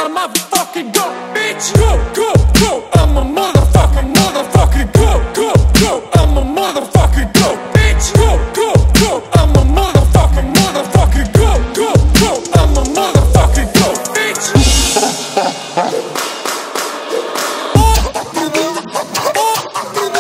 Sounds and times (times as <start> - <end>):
Music: 0.0 - 20.2.